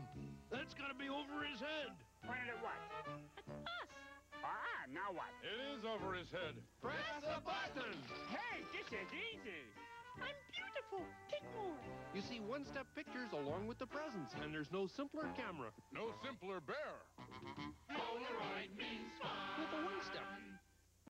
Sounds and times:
Speech: 0.5 - 3.0, 4.4 - 17.1.

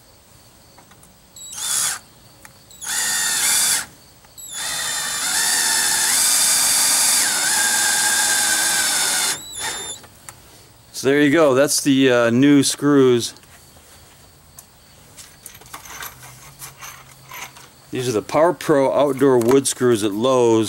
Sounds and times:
Power tool: 1.4 - 2.0, 2.7 - 10.0.

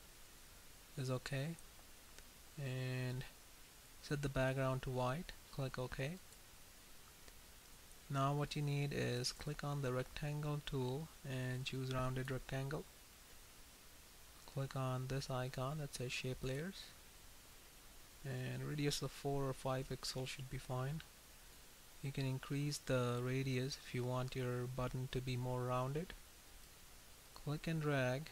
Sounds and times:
Speech: 1.0 - 1.6, 2.6 - 3.3, 4.0 - 6.2, 8.1 - 12.9, 14.5 - 17.0, 18.2 - 21.1, 22.0 - 26.2, 27.4 - 28.3.

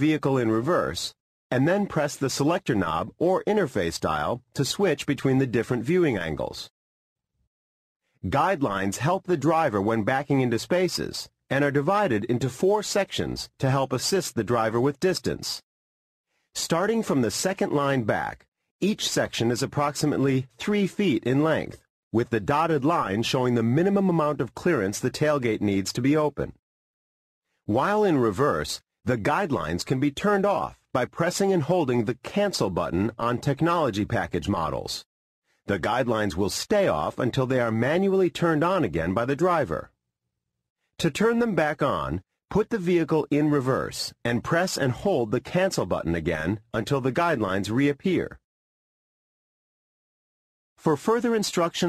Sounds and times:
Speech: 0.0 - 6.7, 8.2 - 15.6, 16.6 - 26.6, 27.7 - 35.1, 35.7 - 39.9, 41.0 - 48.4, 50.8 - 51.8.

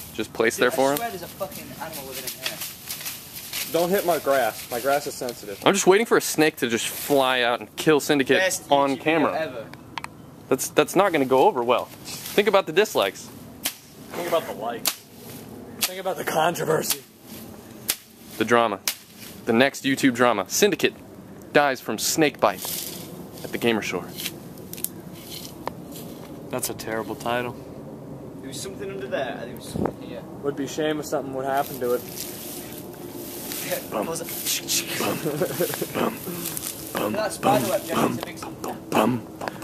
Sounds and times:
Outside, rural or natural: 0.0 - 39.6
Speech: 14.1 - 14.8, 26.5 - 27.6, 33.6 - 35.4, 36.9 - 39.3.

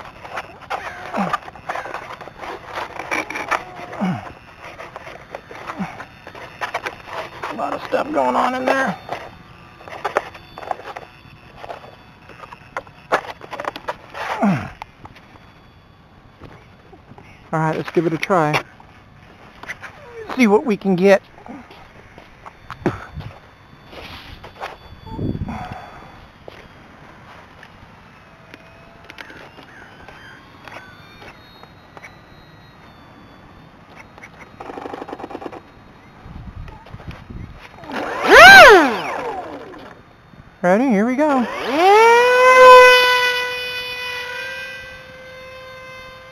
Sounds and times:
Outside, rural or natural: 0.0 - 46.3.

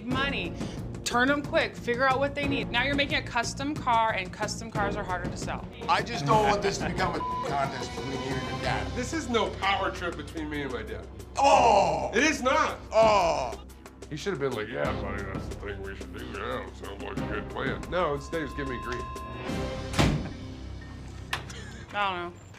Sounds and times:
Music: 0.0 - 22.5.

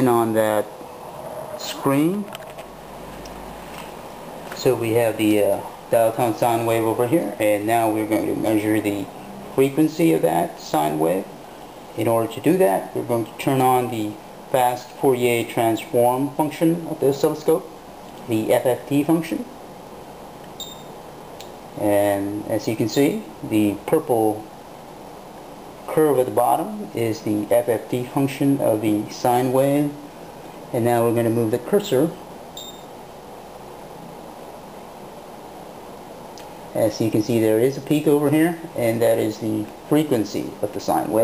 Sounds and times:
Speech: 0.0 - 0.7, 1.6 - 2.4, 4.6 - 11.4, 12.0 - 19.6, 21.8 - 24.5, 25.9 - 30.1, 30.7 - 32.2, 36.7 - 41.2.

